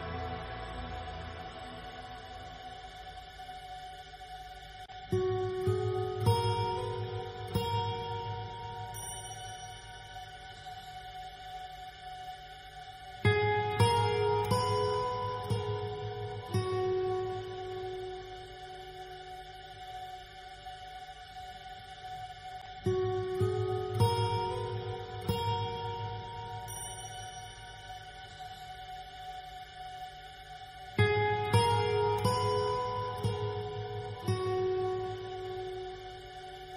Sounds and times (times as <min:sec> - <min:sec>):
Music: 0:00.0 - 0:36.7.